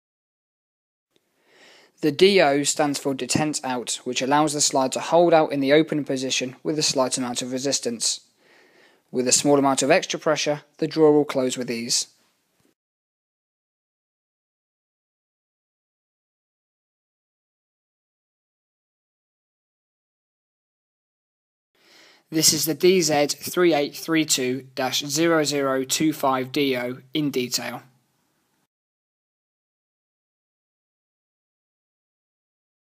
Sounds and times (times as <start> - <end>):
Speech: 2.0 - 8.3, 9.1 - 12.2, 22.3 - 27.9.